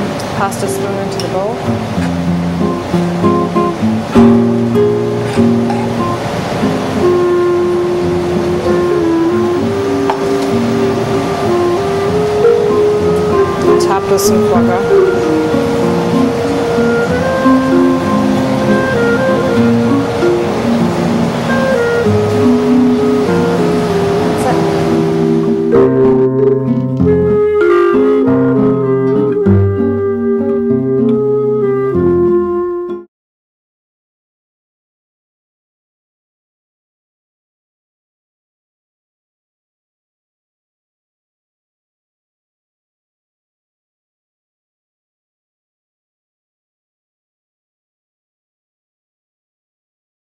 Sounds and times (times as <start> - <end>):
Music: 0.0 - 33.1.